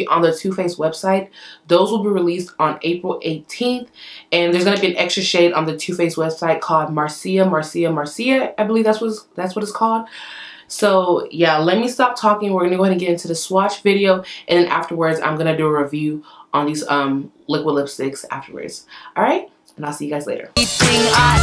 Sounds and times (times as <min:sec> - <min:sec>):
Speech: 0:00.0 - 0:10.1, 0:10.7 - 0:20.6.